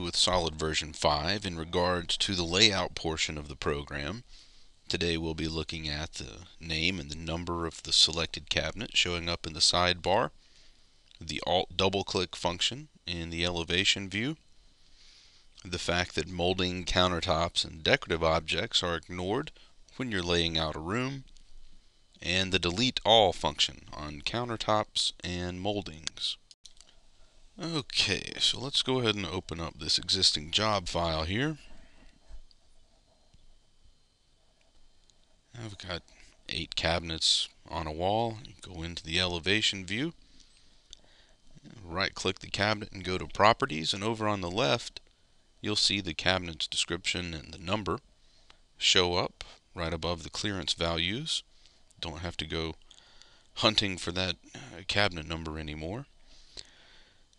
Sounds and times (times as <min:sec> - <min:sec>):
Speech: 0:00.0 - 0:04.3, 0:04.9 - 0:10.4, 0:11.2 - 0:14.4, 0:15.6 - 0:21.3, 0:22.2 - 0:26.5, 0:27.6 - 0:31.7, 0:35.5 - 0:40.2, 0:41.6 - 0:45.0, 0:45.6 - 0:48.0, 0:48.8 - 0:52.8, 0:53.6 - 0:56.2.